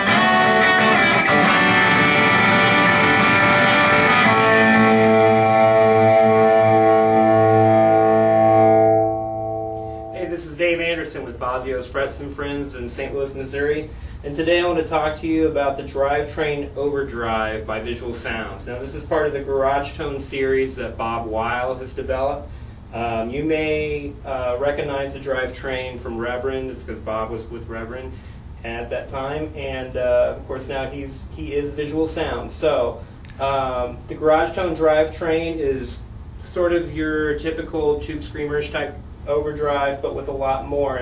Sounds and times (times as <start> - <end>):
Music: 0.0 - 10.2
Speech: 10.2 - 41.0.